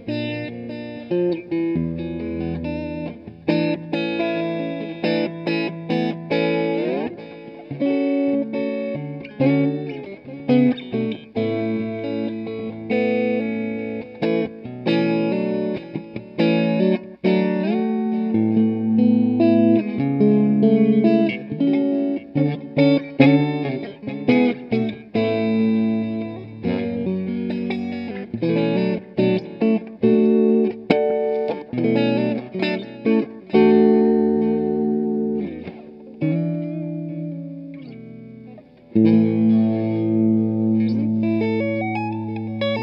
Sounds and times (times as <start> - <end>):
Guitar: 0.0 - 42.8
Inside, small room: 0.0 - 42.8.